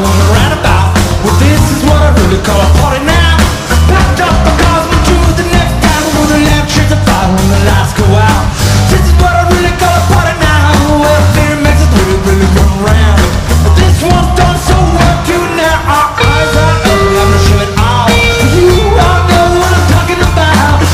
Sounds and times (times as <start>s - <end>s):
Music: 0.0s - 20.9s.